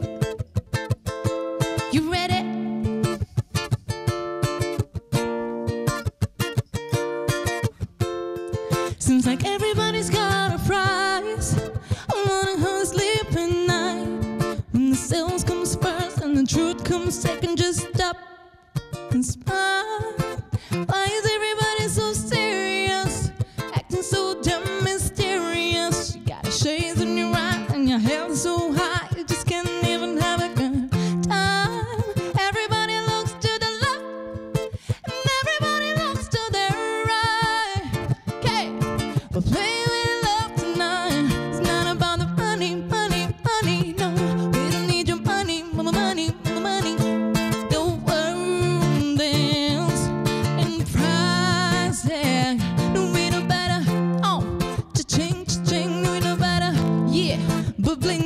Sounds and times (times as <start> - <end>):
Music: 0.0 - 58.2.